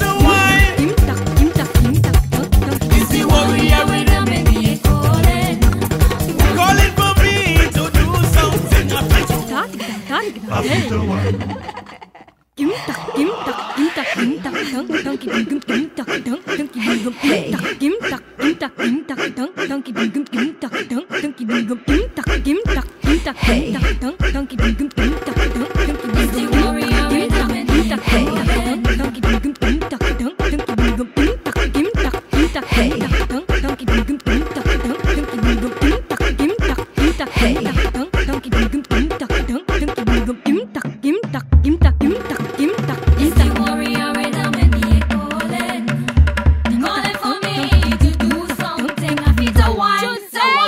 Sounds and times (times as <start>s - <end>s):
Beatboxing: 0.0s - 9.8s, 13.0s - 18.8s, 21.9s - 50.2s.